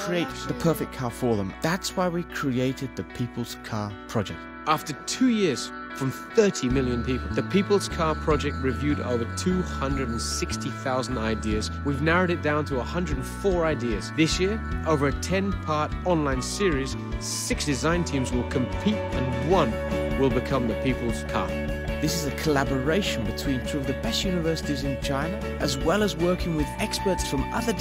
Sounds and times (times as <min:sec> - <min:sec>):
Music: 0:00.0 - 0:27.8
Speech: 0:00.0 - 0:27.8.